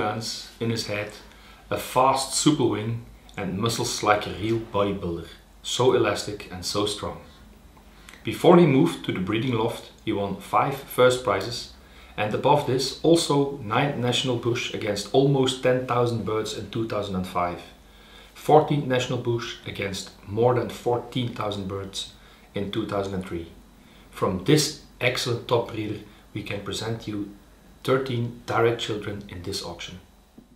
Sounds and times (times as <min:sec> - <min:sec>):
Speech: 0:00.0 - 0:07.5, 0:08.1 - 0:17.8, 0:18.4 - 0:30.2.